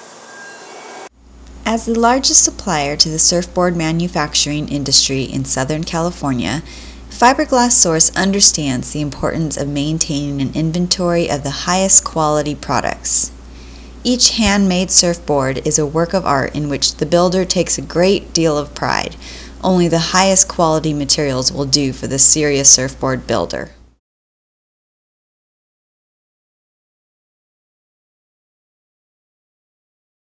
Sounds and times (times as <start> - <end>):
Speech: 1.7 - 13.3, 14.1 - 23.8.